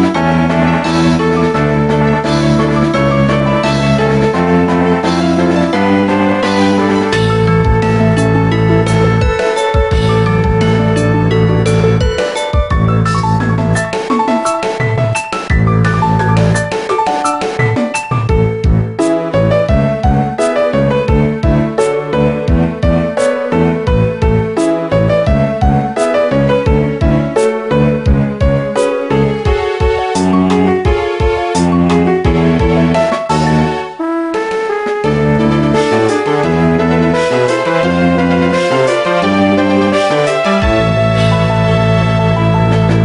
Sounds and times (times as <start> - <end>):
Video game music: 0.0 - 43.0.